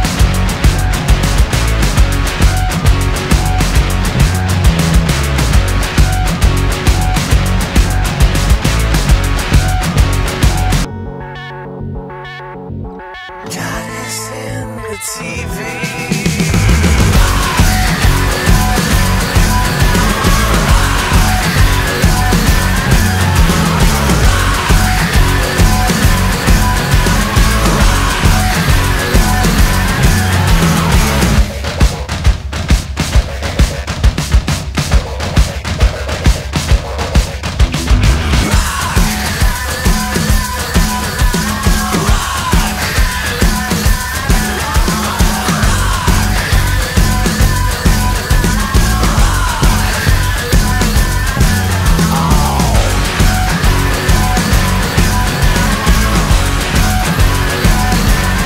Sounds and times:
Heavy metal: 0:00.0 - 0:12.1, 0:13.0 - 0:58.4
Exciting music: 0:00.0 - 0:58.4.

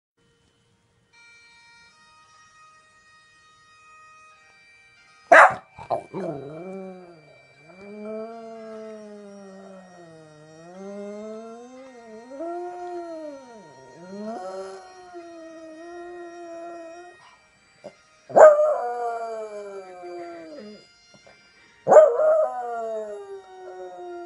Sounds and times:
Bagpipes: 0:00.2 - 0:24.2.

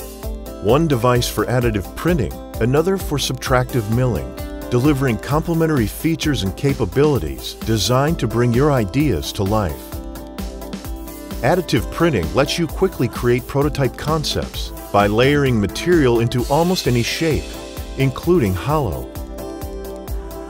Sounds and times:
Music: 0:00.0 - 0:20.4
Speech: 0:00.6 - 0:09.9, 0:11.4 - 0:19.1.

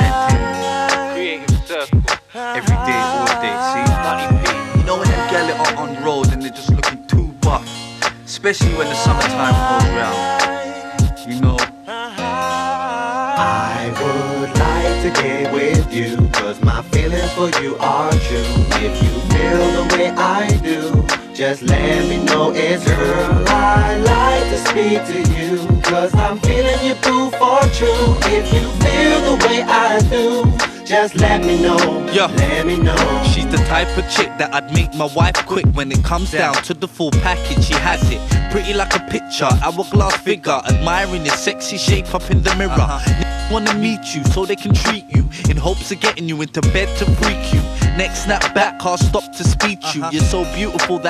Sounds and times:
Independent music: 0:00.0 - 0:51.0
Rhythm and blues: 0:00.0 - 0:51.0.

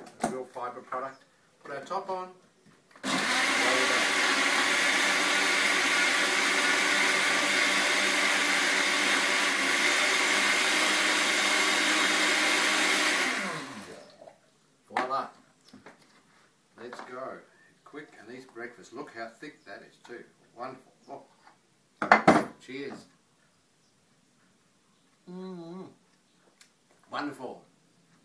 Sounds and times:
Speech: 0:00.2 - 0:02.4, 0:14.9 - 0:15.4, 0:16.8 - 0:21.3, 0:22.6 - 0:23.1, 0:27.1 - 0:27.7.

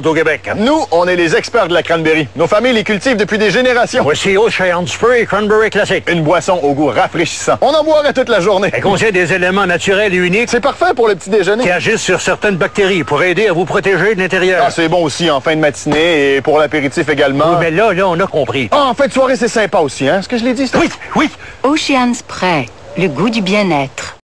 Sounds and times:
Speech: 0:00.0 - 0:24.2.

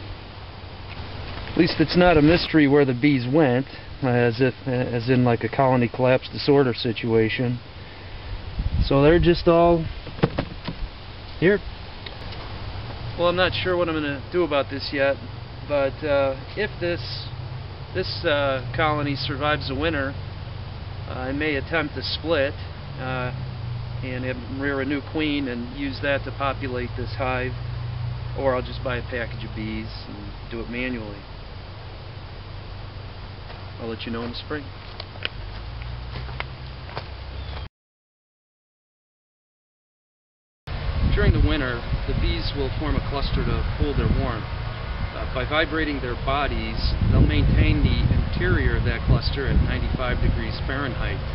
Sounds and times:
Speech: 0:01.6 - 0:07.6, 0:08.8 - 0:09.9, 0:11.4 - 0:11.6, 0:13.2 - 0:17.4, 0:18.0 - 0:20.2, 0:21.1 - 0:23.4, 0:24.0 - 0:27.6, 0:28.4 - 0:31.2, 0:33.8 - 0:34.7, 0:41.1 - 0:44.5, 0:45.2 - 0:51.2.

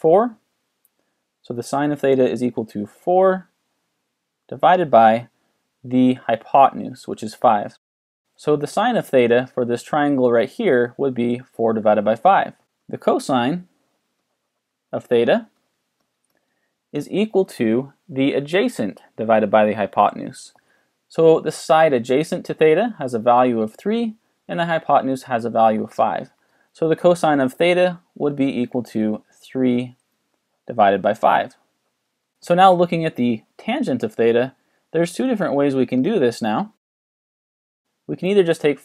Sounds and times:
Speech: 0:00.0 - 0:00.4, 0:01.5 - 0:03.5, 0:04.5 - 0:07.8, 0:08.4 - 0:13.7, 0:14.9 - 0:15.6, 0:16.9 - 0:30.0, 0:30.7 - 0:31.6, 0:32.4 - 0:36.8, 0:38.1 - 0:38.8.

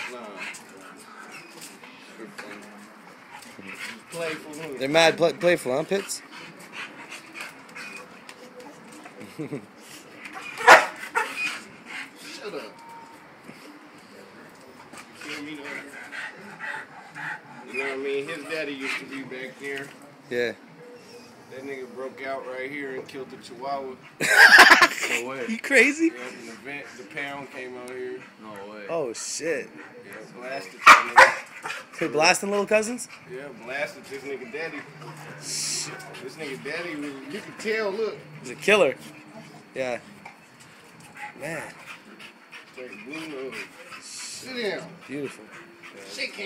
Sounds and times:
Yip: 0:10.4 - 0:11.6, 0:30.8 - 0:31.8
Bow-wow: 0:10.6 - 0:11.5, 0:30.8 - 0:31.8.

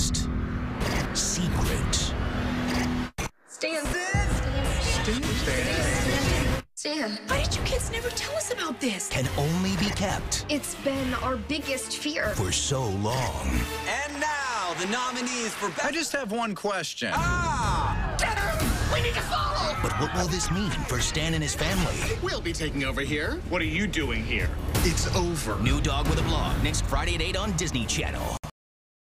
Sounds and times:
Music: 0:03.9 - 0:15.8, 0:18.0 - 0:28.4.

